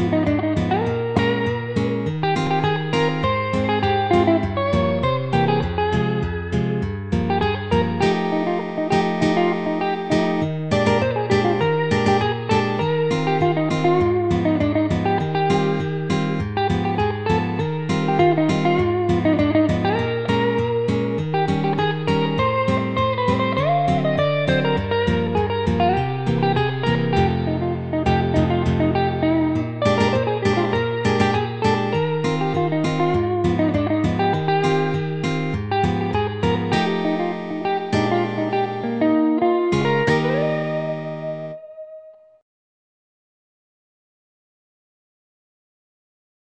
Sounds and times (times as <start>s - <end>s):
Music: 0.0s - 42.4s.